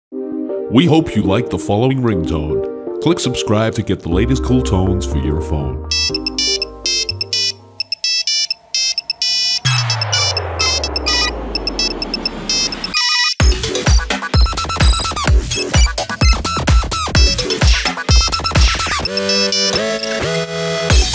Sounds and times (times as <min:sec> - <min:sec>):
Music: 0:00.1 - 0:21.1
Speech: 0:00.7 - 0:05.8
Ringtone: 0:05.9 - 0:16.4, 0:17.2 - 0:20.4.